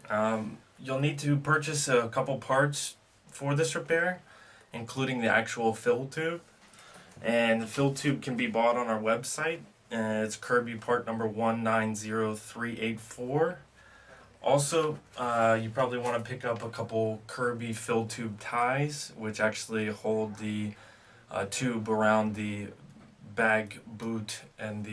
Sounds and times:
Speech: 0.0s - 6.5s, 7.2s - 13.7s, 14.4s - 24.9s.

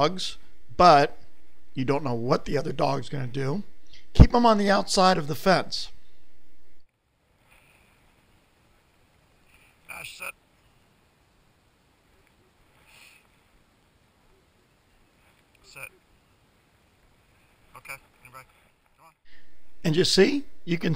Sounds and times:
Speech: 0.0s - 1.2s, 1.8s - 6.0s, 9.9s - 10.4s, 15.7s - 16.0s, 19.8s - 20.9s.

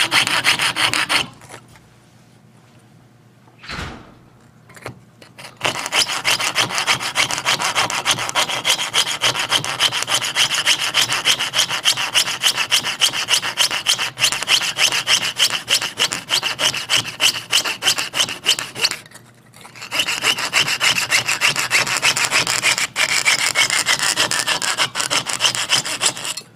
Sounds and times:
Rub: 0.0s - 1.6s, 5.4s - 26.4s
Sawing: 0.0s - 1.6s, 5.3s - 19.0s, 19.7s - 26.4s.

